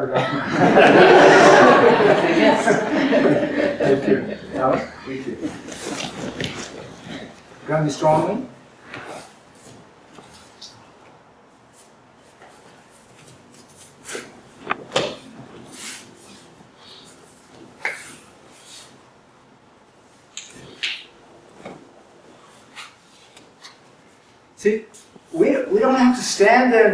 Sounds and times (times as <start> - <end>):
Inside, large room or hall: 0.0 - 19.3, 20.1 - 26.9.